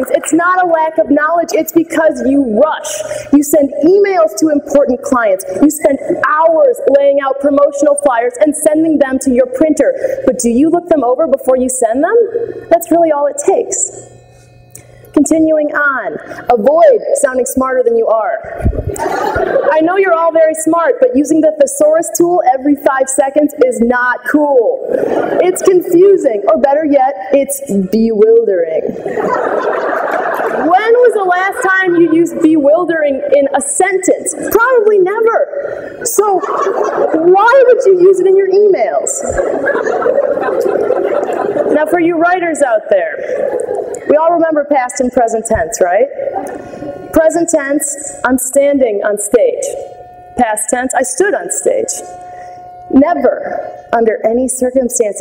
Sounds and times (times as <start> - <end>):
Speech: 0.0 - 14.0, 15.2 - 18.6, 19.7 - 24.8, 25.4 - 29.0, 30.6 - 36.5, 37.1 - 39.4, 41.7 - 43.2, 44.1 - 46.2, 47.2 - 49.8, 50.4 - 52.1, 52.9 - 55.2
Laughter: 18.8 - 19.8, 24.9 - 25.6, 29.0 - 30.8, 36.4 - 37.3, 39.2 - 41.8, 43.2 - 44.1.